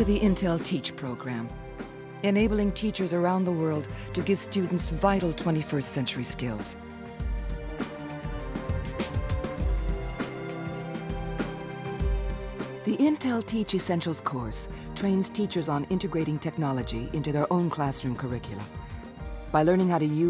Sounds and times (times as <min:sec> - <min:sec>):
Speech: 0:00.0 - 0:01.5, 0:02.2 - 0:06.8, 0:12.8 - 0:18.7, 0:19.5 - 0:20.2
Music: 0:00.0 - 0:20.2.